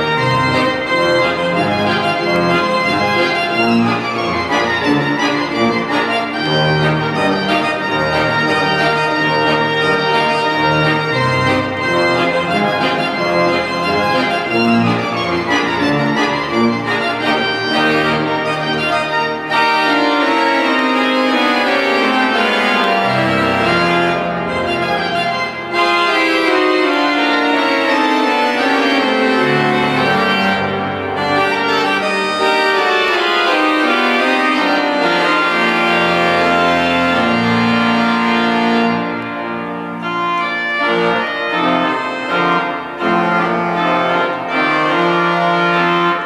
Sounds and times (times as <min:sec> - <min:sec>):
Piano: 0:00.0 - 0:46.2.